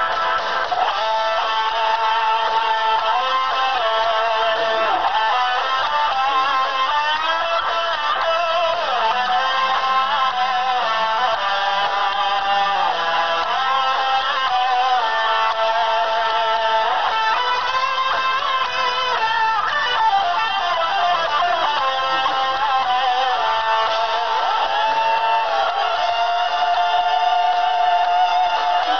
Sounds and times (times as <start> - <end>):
Inside, large room or hall: 0.0 - 28.9
Music: 0.0 - 28.9.